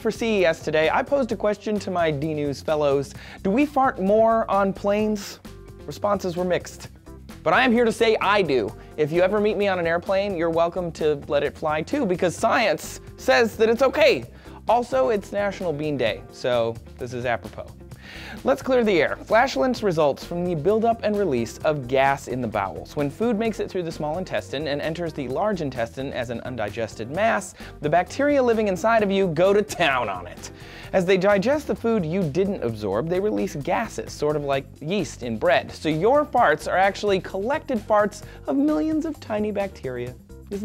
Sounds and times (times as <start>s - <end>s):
Speech: 0.0s - 17.8s, 18.4s - 40.6s
Music: 0.0s - 40.6s.